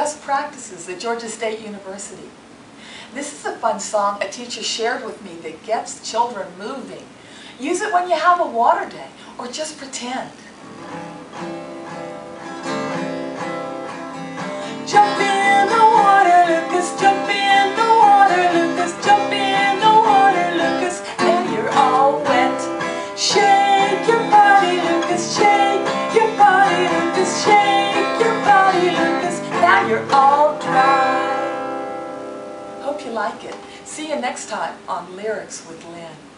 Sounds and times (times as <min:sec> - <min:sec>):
Speech: 0:00.0 - 0:02.3, 0:03.2 - 0:10.4, 0:32.8 - 0:36.3
Music: 0:10.6 - 0:34.2.